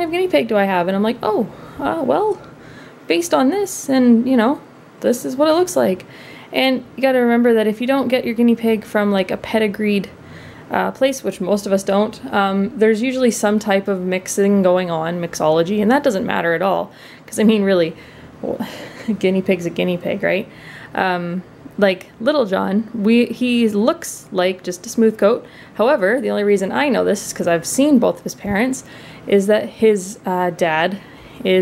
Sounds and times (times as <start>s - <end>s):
Speech: 0.0s - 2.5s, 3.1s - 31.6s.